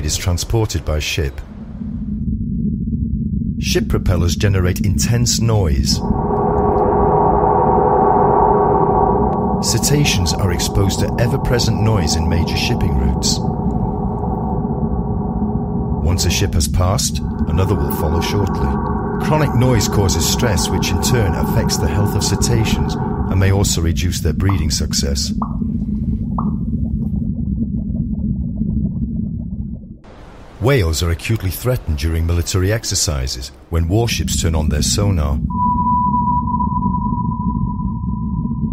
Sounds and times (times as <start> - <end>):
Speech: 0.0 - 1.4, 3.6 - 6.0, 9.6 - 13.4, 16.0 - 25.4, 30.6 - 35.4
Sonar: 35.5 - 38.7.